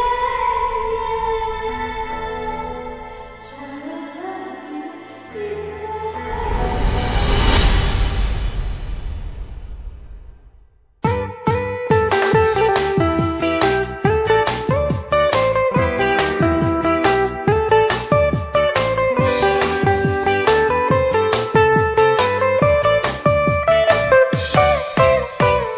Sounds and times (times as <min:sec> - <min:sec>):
Funk: 0:11.0 - 0:25.7
Pop music: 0:11.1 - 0:25.7.